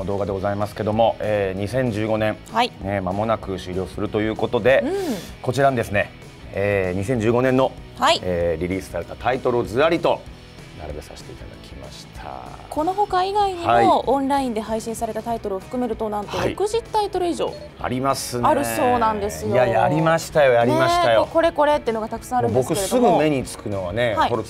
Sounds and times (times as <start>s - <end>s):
Music: 0.0s - 24.5s.